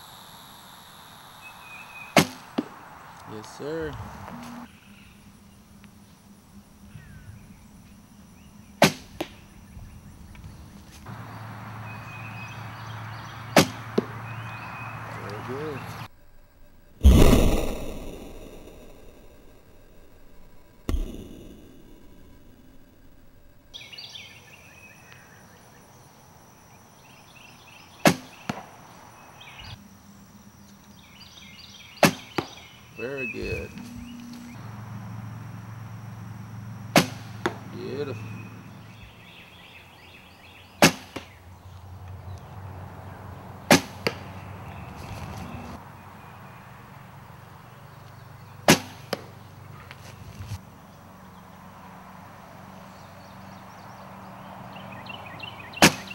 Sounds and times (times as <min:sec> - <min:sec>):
Arrow: 0:02.2 - 0:02.7, 0:08.8 - 0:09.4, 0:13.6 - 0:14.1, 0:17.0 - 0:19.2, 0:20.9 - 0:22.3, 0:28.0 - 0:28.7, 0:32.0 - 0:32.6, 0:36.9 - 0:37.6, 0:40.8 - 0:41.3, 0:43.7 - 0:44.2, 0:48.7 - 0:49.3, 0:55.8 - 0:56.1
Speech: 0:03.3 - 0:04.0, 0:15.1 - 0:15.9, 0:33.0 - 0:33.8, 0:37.7 - 0:38.3.